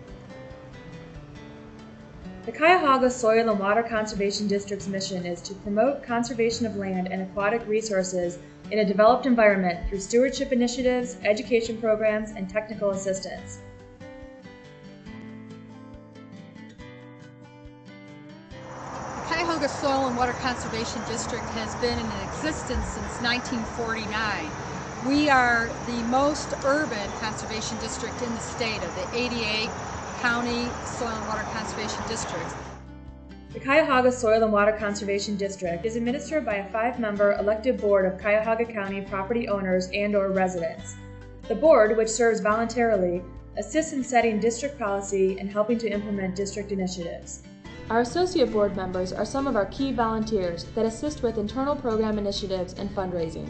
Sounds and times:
Music: 0.0 - 53.5
Speech: 2.5 - 13.6, 19.3 - 32.6, 33.6 - 53.5.

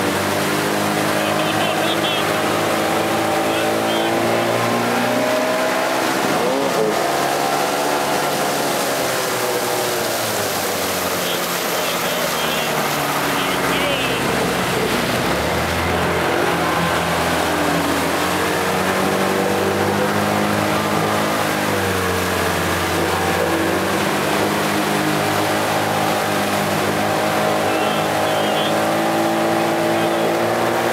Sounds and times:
Motorboat, speedboat: 0.0 - 30.9.

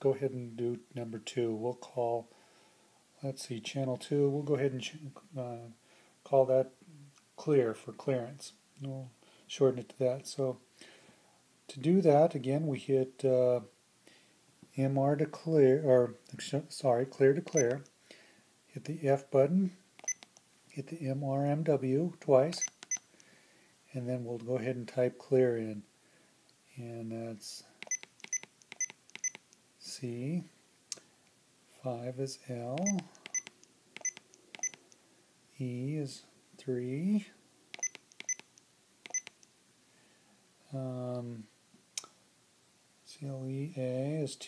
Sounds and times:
Speech: 0.0 - 2.3, 3.2 - 6.8, 7.4 - 10.6, 11.7 - 13.7, 14.7 - 17.8, 18.7 - 19.8, 20.7 - 22.6, 23.9 - 25.9, 26.7 - 27.8, 29.8 - 30.6, 31.8 - 33.1, 35.6 - 37.4, 40.6 - 41.5, 43.0 - 44.4
Inside, small room: 0.0 - 44.4.

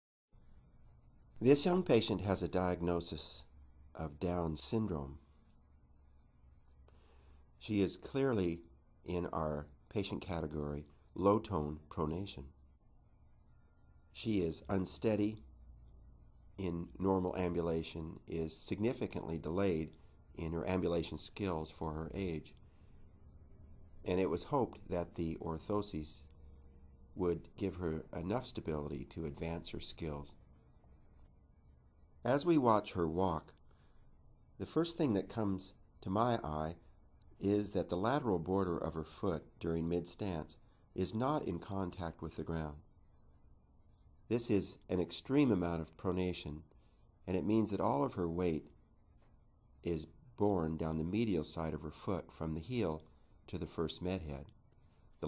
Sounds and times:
Speech: 1.4 - 5.2, 7.6 - 12.6, 14.2 - 15.5, 16.6 - 22.6, 24.0 - 26.3, 27.2 - 30.4, 32.2 - 33.6, 34.6 - 42.9, 44.3 - 46.7, 47.3 - 48.8, 49.8 - 54.5.

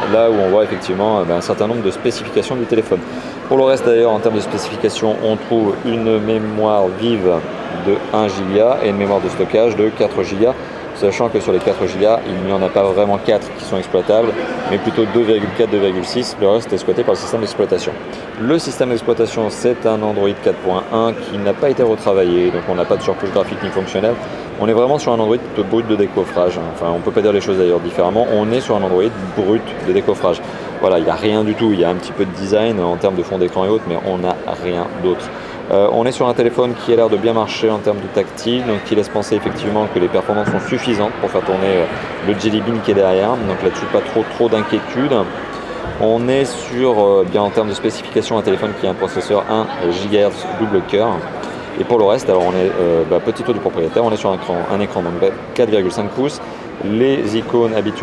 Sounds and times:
Speech: 0.0 - 58.0.

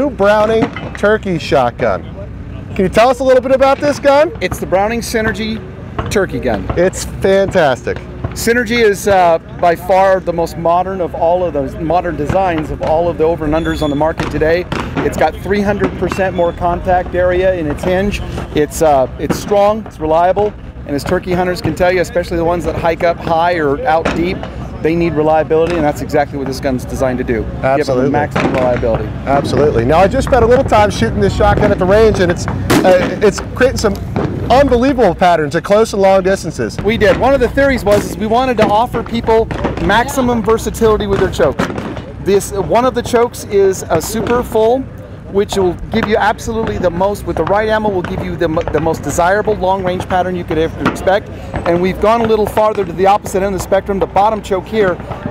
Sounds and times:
Speech: 0.0 - 55.3.

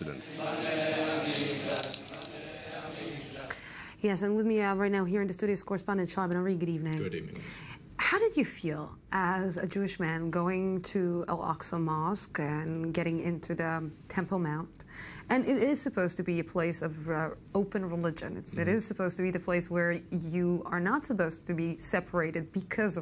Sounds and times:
Speech: 15.3 - 23.0.

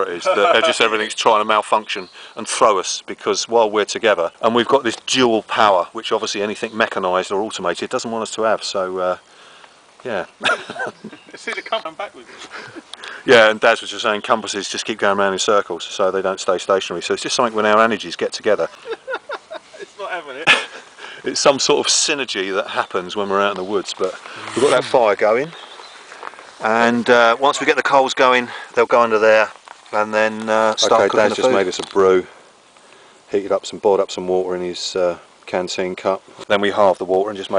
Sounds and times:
Speech: 0.0 - 9.2, 13.2 - 18.7, 21.2 - 25.6, 26.6 - 32.3, 33.3 - 37.5
Outside, rural or natural: 0.0 - 37.5.

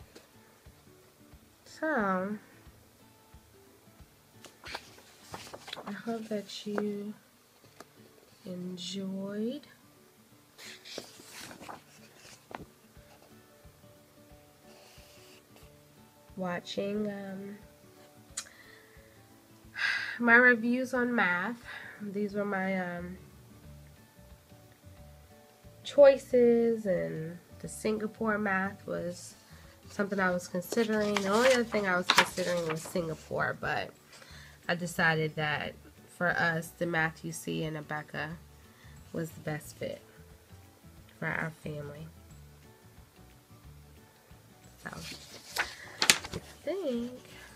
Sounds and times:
Inside, small room: 0.0 - 47.5.

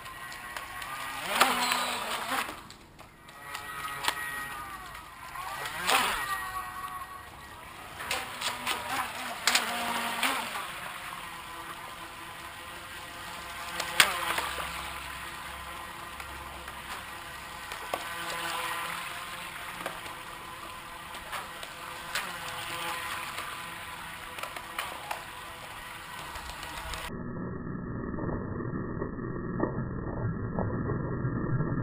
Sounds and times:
Motorboat, speedboat: 3.3 - 27.1.

